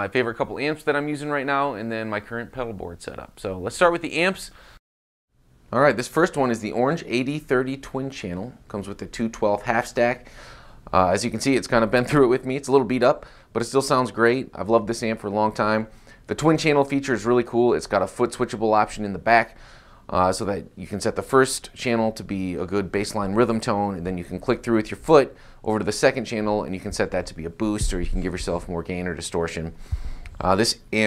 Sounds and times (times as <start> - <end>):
Speech: 0.0 - 4.6, 5.7 - 10.2, 10.9 - 29.8, 30.4 - 31.0.